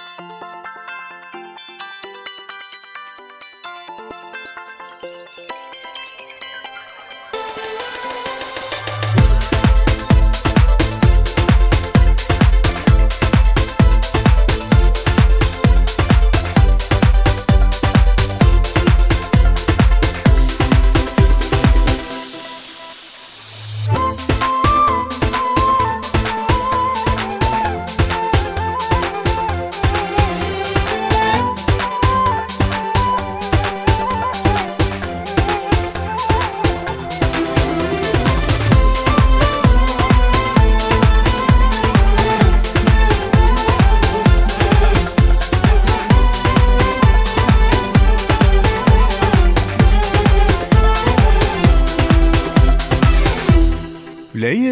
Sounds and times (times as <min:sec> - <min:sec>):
Exciting music: 0:07.4 - 0:54.7.